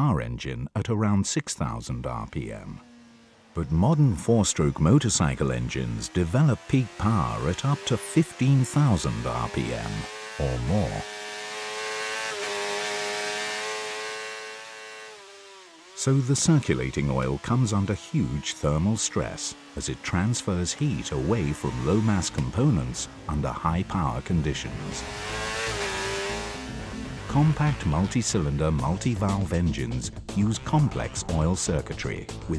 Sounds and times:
Speech: 0.0 - 2.8, 3.6 - 11.1, 16.0 - 25.0, 27.3 - 32.5
Medium engine (mid frequency): 1.6 - 30.3
Motorcycle: 1.6 - 32.5
Accelerating, revving, vroom: 6.0 - 28.5.

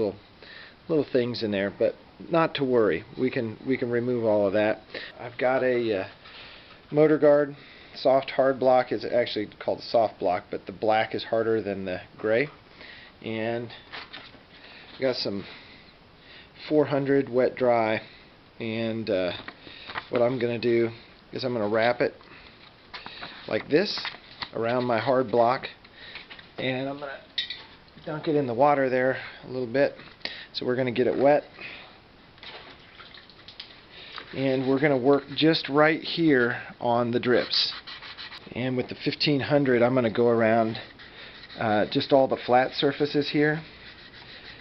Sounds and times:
Inside, small room: 0.0 - 44.6
Speech: 0.9 - 6.2, 6.9 - 12.6, 13.2 - 13.8, 15.0 - 15.5, 16.6 - 19.4, 20.1 - 22.2, 23.5 - 25.8, 26.6 - 27.3, 28.0 - 30.0, 30.6 - 31.5, 34.3 - 37.8, 38.5 - 40.9, 41.6 - 43.7.

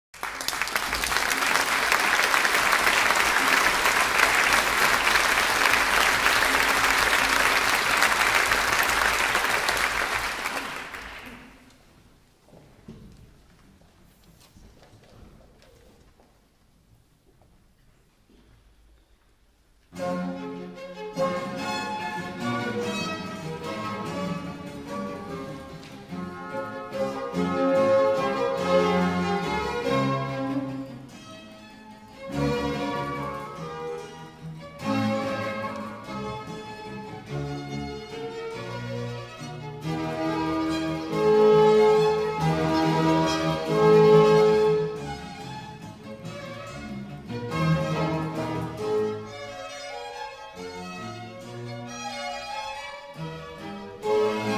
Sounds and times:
Applause: 0.1 - 11.7.

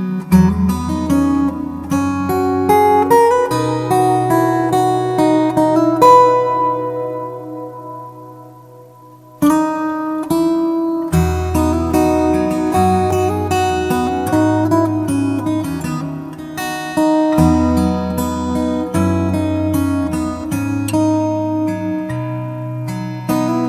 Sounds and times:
Music: 0.0 - 23.6.

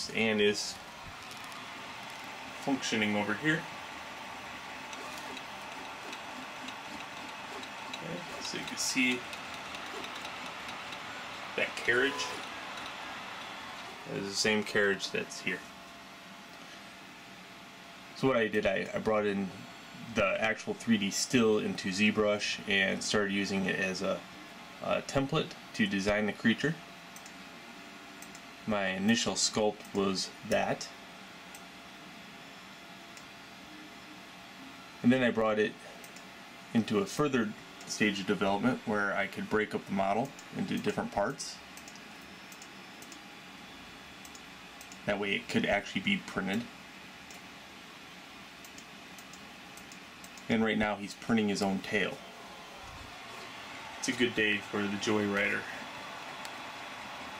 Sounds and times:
Speech: 0.0 - 0.8, 2.6 - 3.7, 8.0 - 9.3, 11.6 - 12.4, 14.1 - 15.7, 18.2 - 24.2, 24.8 - 26.8, 28.7 - 31.0, 35.0 - 35.9, 36.7 - 41.6, 45.0 - 46.7, 50.5 - 52.2, 54.0 - 55.8
Printer: 1.0 - 15.7.

